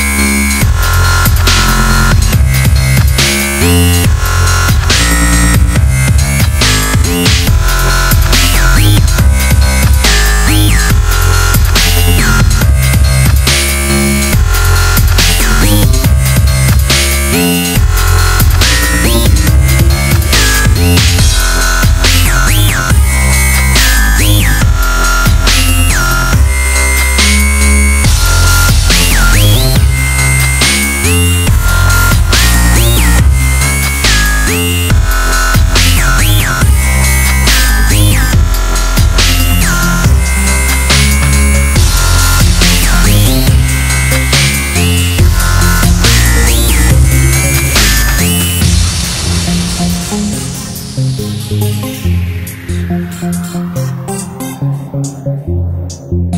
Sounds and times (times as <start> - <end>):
Drum and bass: 0.0 - 56.3
Dubstep: 0.0 - 56.3.